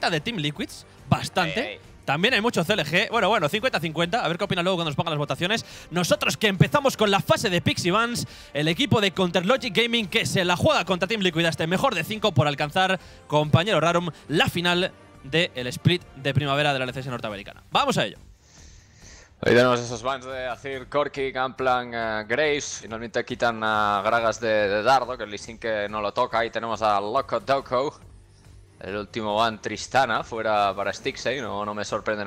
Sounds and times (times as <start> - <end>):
Speech: 0.0 - 18.2, 19.4 - 28.0, 28.8 - 32.2
Music: 0.0 - 32.2.